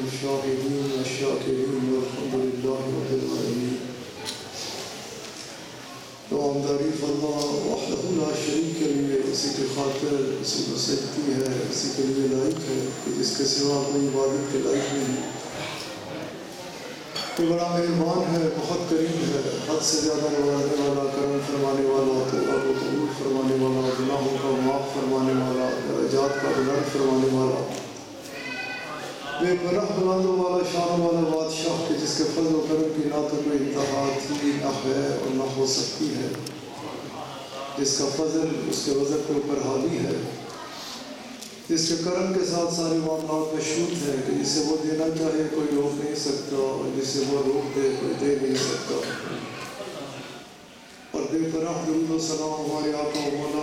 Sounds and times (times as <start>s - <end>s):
Male speech, man speaking: 0.0s - 4.0s, 6.3s - 15.8s, 17.2s - 40.5s, 41.6s - 50.4s, 51.1s - 53.6s
Narration, monologue: 0.0s - 53.6s.